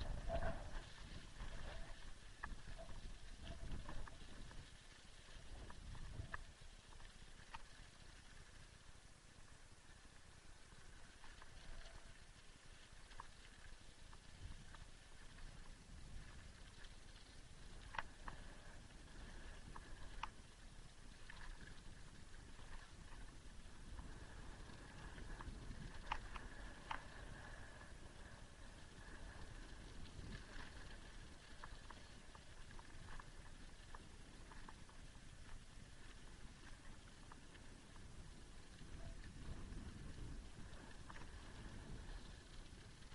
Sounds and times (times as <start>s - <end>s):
Bicycle: 0.0s - 43.1s.